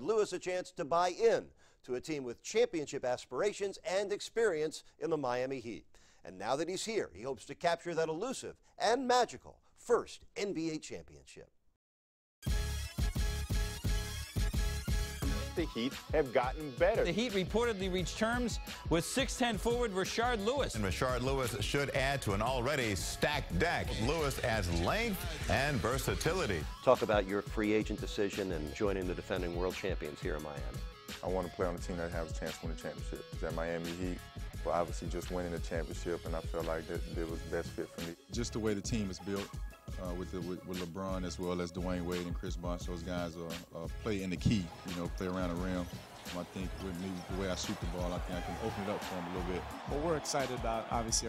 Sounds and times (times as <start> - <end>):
Speech: 0.0 - 11.5, 15.6 - 51.2.